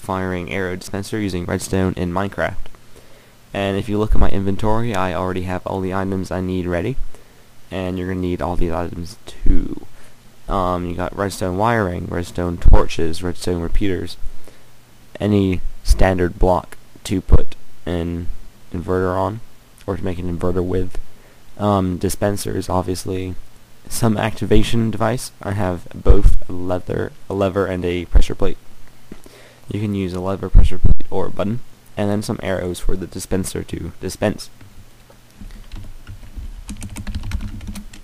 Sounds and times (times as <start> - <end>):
Speech: 0.0 - 2.7, 3.5 - 7.0, 7.7 - 9.9, 10.5 - 14.2, 15.1 - 21.0, 21.6 - 28.6, 29.7 - 34.6.